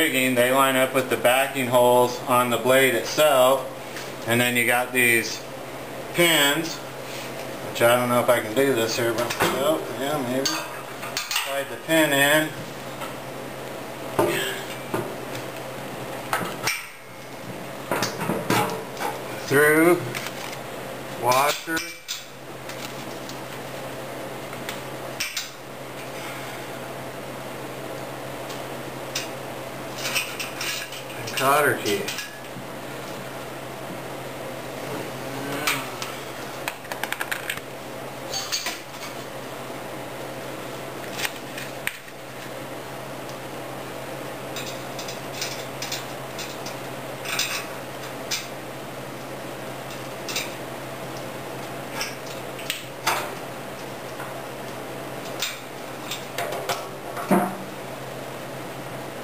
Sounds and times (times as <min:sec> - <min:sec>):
Speech: 0:00.0 - 0:03.7, 0:04.3 - 0:05.5, 0:06.2 - 0:06.8, 0:07.7 - 0:10.7, 0:11.4 - 0:12.6, 0:19.4 - 0:20.1, 0:21.2 - 0:22.0, 0:31.2 - 0:32.2.